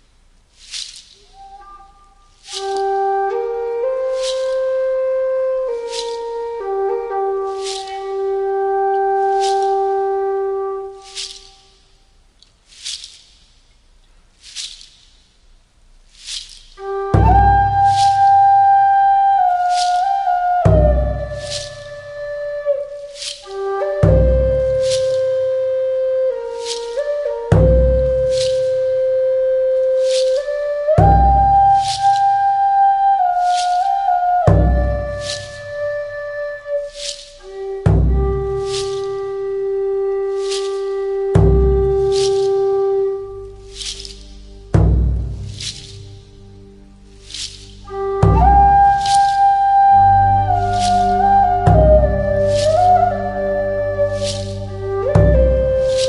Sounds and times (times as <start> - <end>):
Music: 1.2 - 12.2, 16.2 - 56.0.